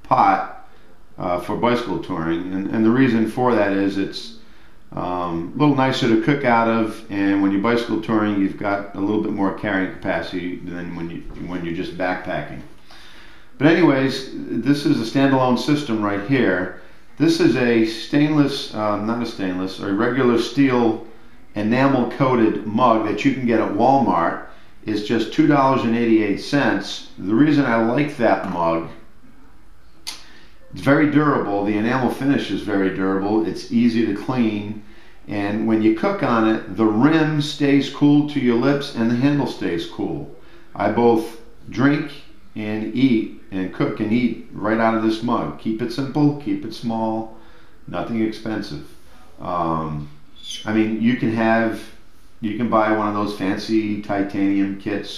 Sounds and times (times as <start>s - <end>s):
Speech: 0.0s - 12.7s, 13.6s - 29.1s, 30.1s - 55.1s.